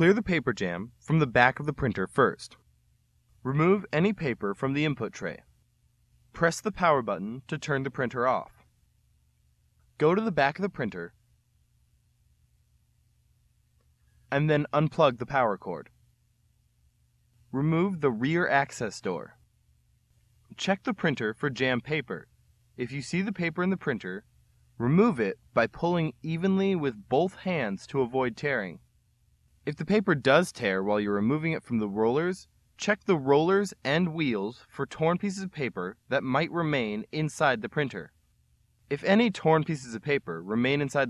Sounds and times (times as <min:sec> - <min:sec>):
Speech: 0:00.0 - 0:02.6, 0:03.4 - 0:05.5, 0:06.4 - 0:08.6, 0:10.0 - 0:11.2, 0:14.3 - 0:15.9, 0:17.6 - 0:19.4, 0:20.5 - 0:24.2, 0:24.8 - 0:28.8, 0:29.7 - 0:38.1, 0:38.9 - 0:41.0.